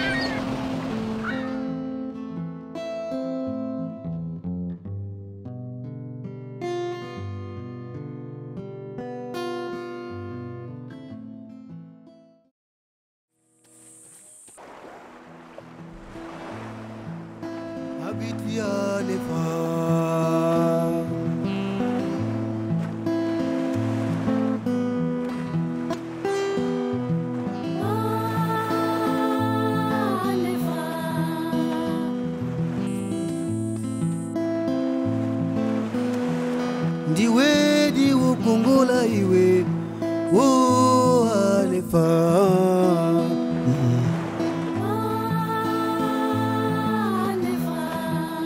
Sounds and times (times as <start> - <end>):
Music: 0.0 - 12.5, 15.2 - 48.4.